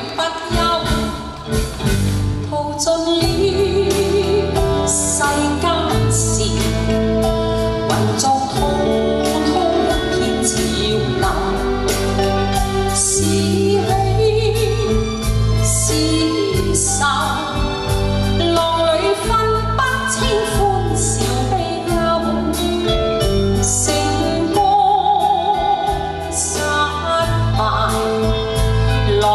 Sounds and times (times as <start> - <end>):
Music: 0.0 - 29.3.